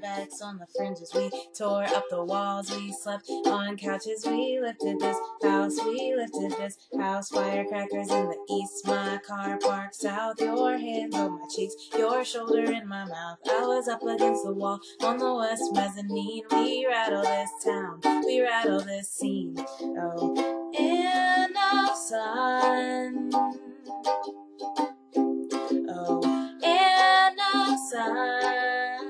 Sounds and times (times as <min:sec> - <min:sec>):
Music: 0:00.0 - 0:29.0.